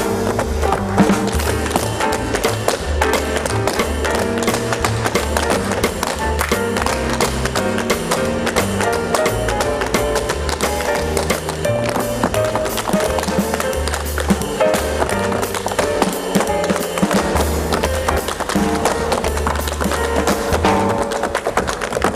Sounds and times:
Music: 0.0s - 22.1s.

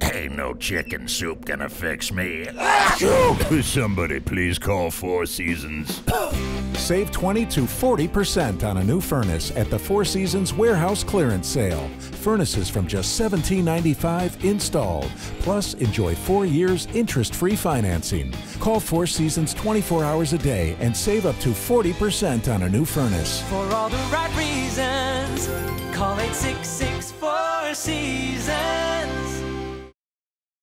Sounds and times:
Speech: 0.0s - 23.5s
Music: 0.6s - 30.0s.

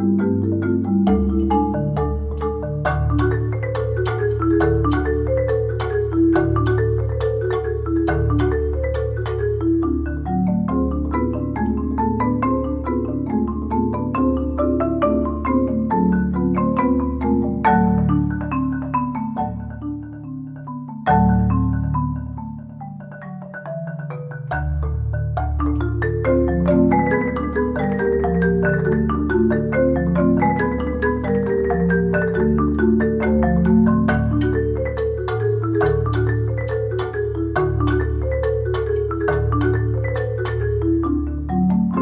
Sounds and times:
Glockenspiel: 0.0s - 42.0s
Marimba, xylophone: 0.0s - 42.0s.

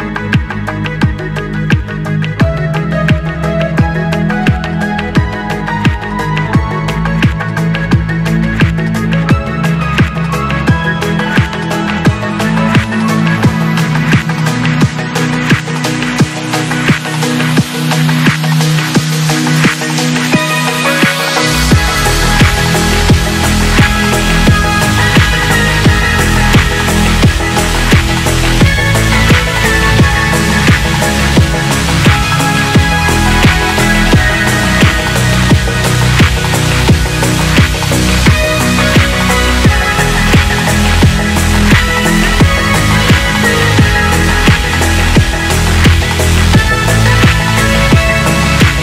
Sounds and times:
Trance music: 0.0s - 48.8s.

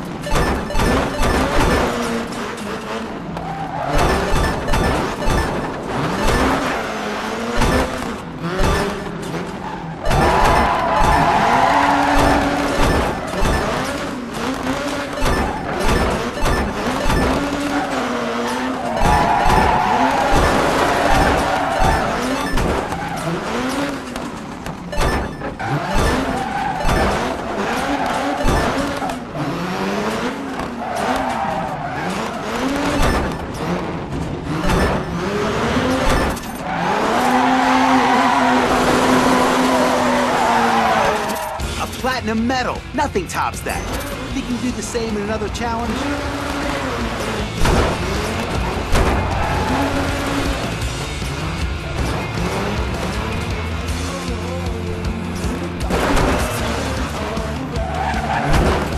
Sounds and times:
Smash, crash: 10.0s - 17.7s, 55.8s - 56.8s.

